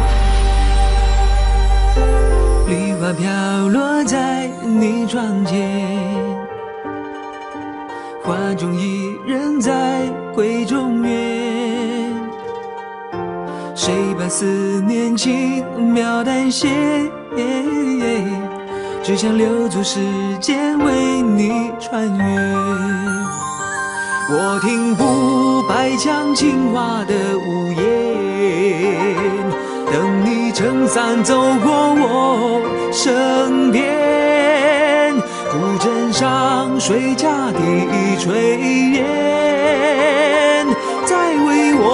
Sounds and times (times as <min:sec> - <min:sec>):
Music: 0:00.0 - 0:41.9.